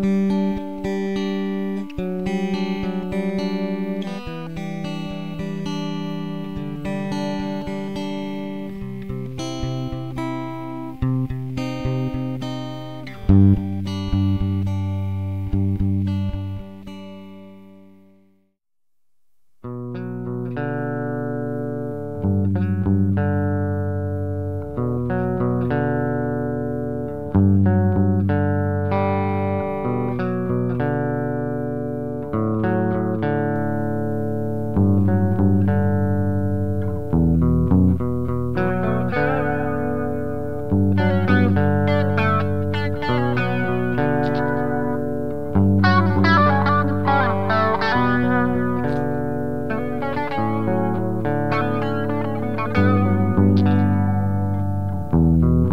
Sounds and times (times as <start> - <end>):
Music: 0.0 - 18.6, 19.6 - 55.7.